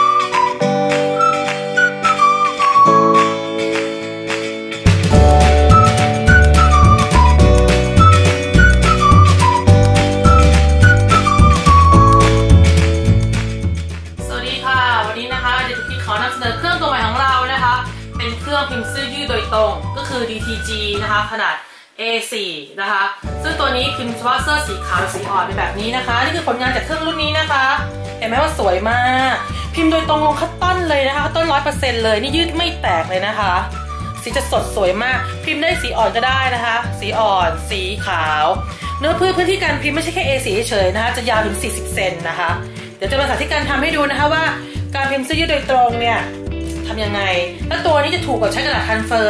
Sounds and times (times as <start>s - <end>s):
Music: 0.0s - 21.5s, 23.2s - 49.2s
Speech: 14.3s - 49.2s.